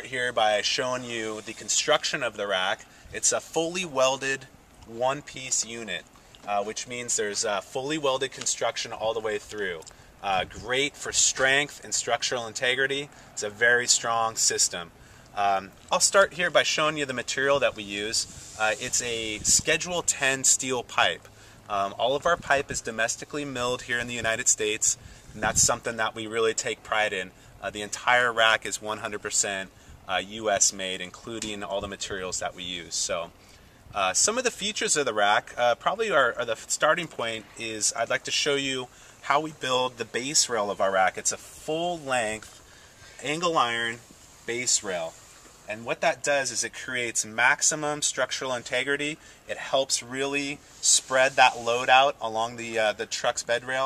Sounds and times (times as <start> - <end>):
Speech: 0.0 - 33.4, 34.0 - 42.6, 43.2 - 53.8.